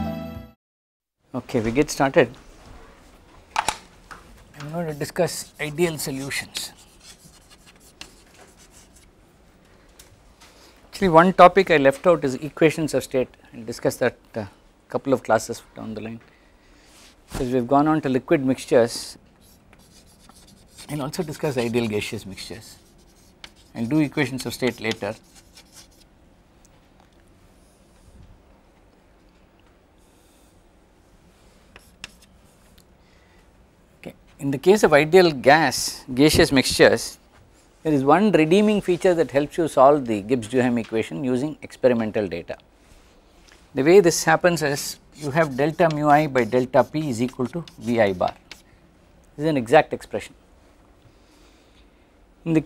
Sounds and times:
Speech: 1.3 - 2.4, 4.5 - 6.8, 10.9 - 16.2, 17.4 - 19.2, 20.8 - 22.8, 23.7 - 25.2, 34.0 - 37.2, 37.8 - 42.6, 43.8 - 48.4, 49.4 - 50.4, 52.4 - 52.6.

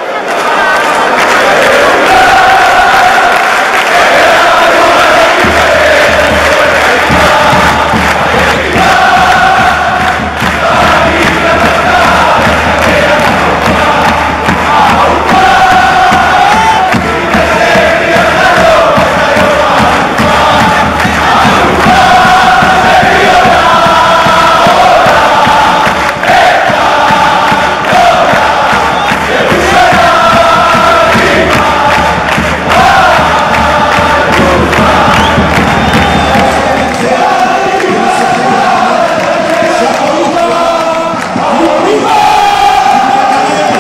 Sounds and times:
Music: 0.1 - 43.8.

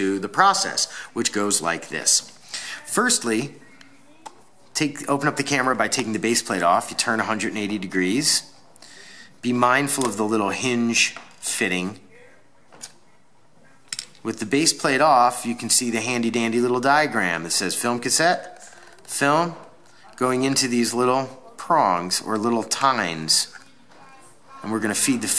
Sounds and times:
Speech: 0.0 - 8.5, 14.2 - 25.3.

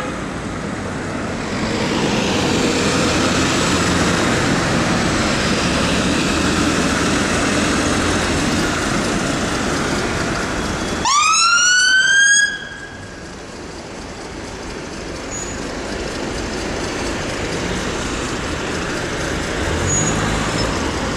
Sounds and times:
Engine: 0.0 - 21.1.

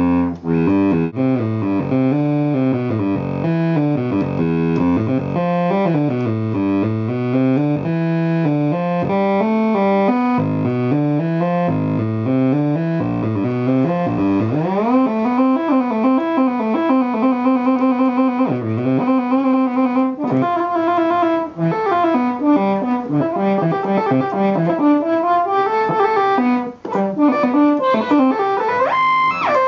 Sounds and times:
Electric piano: 0.0 - 29.6
Synthesizer: 0.0 - 29.6.

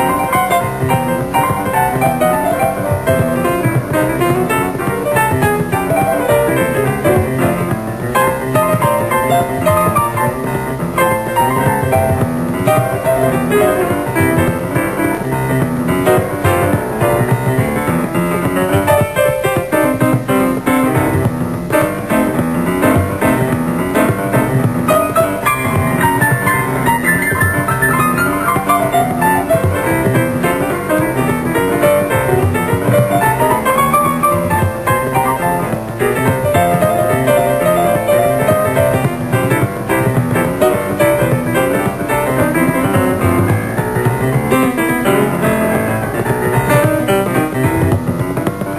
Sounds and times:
Music: 0.0 - 48.7.

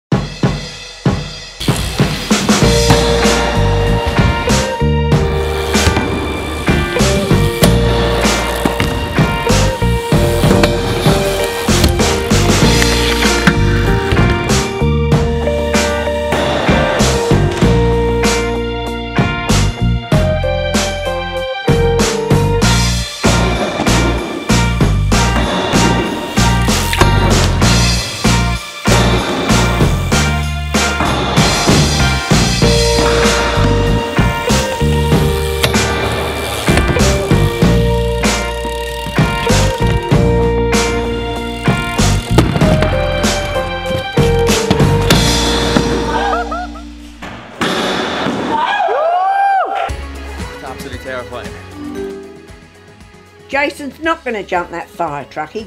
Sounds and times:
Bass drum: 0.1 - 15.6, 21.8 - 36.1, 36.7 - 46.2
Drum kit: 0.1 - 21.1, 21.7 - 53.4.

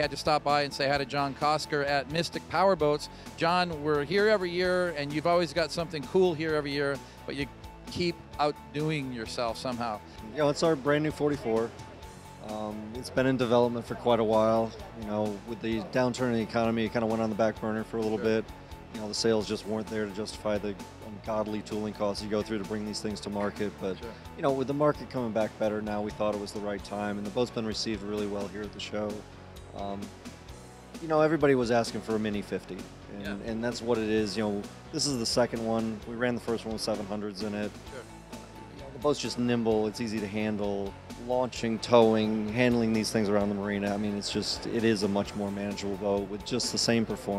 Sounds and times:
Speech: 0.0 - 11.7, 12.4 - 18.4, 19.0 - 29.2, 29.8 - 30.1, 31.0 - 38.0, 38.9 - 47.3
Music: 0.0 - 47.3.

